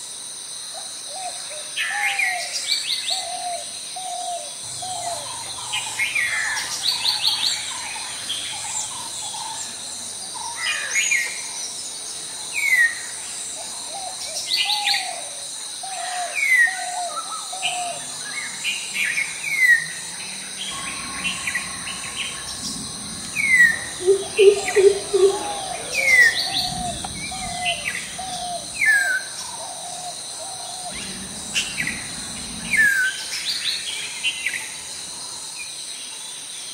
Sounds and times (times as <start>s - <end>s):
Chirp, tweet: 20.6s - 28.8s.